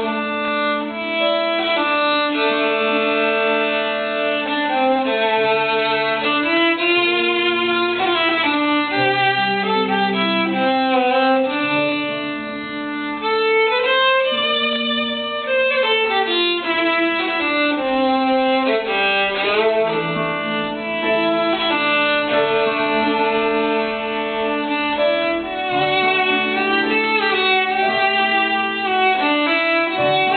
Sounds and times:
Violin, fiddle: 0.0s - 30.3s.

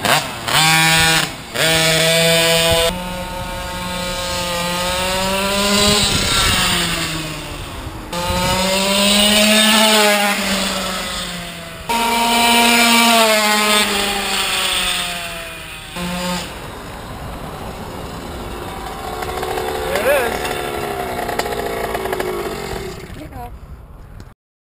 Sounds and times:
Accelerating, revving, vroom: 0.0s - 16.6s, 18.7s - 23.1s
Car: 0.0s - 24.3s
Medium engine (mid frequency): 0.0s - 24.3s
Idling: 15.3s - 23.5s.

